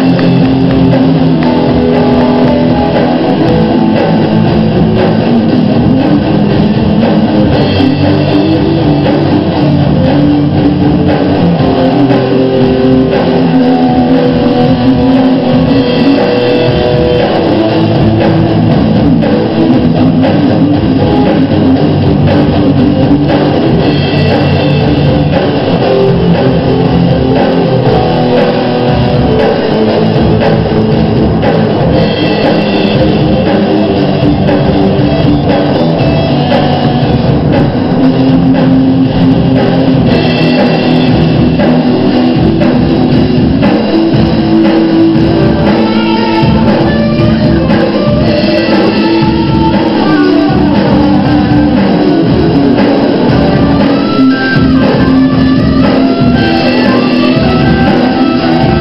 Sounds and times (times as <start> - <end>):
Strum: 0.0 - 58.8.